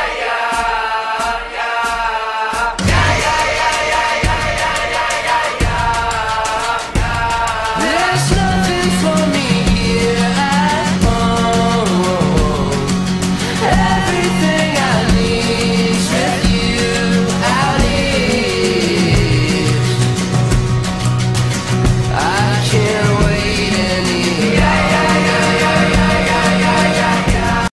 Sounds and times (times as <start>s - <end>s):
Electronic music: 2.8s - 7.9s, 24.4s - 27.7s.